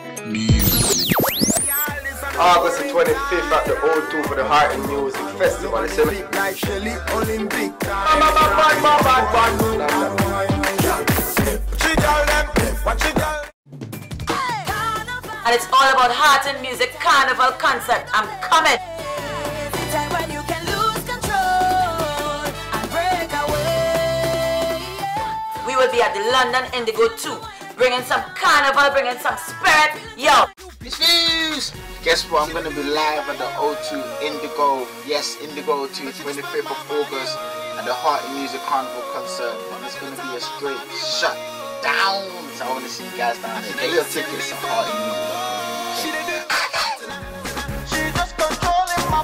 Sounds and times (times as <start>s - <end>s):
Speech: 2.4s - 6.2s, 8.1s - 10.0s, 15.5s - 18.8s, 25.6s - 45.1s.